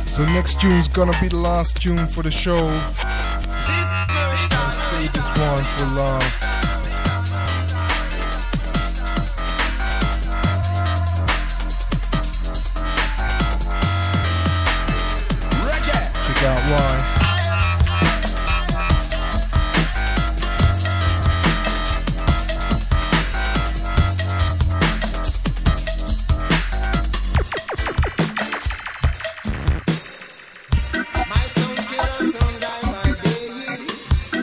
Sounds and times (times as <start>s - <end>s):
Drum and bass: 0.0s - 34.4s
Dubstep: 0.0s - 34.4s.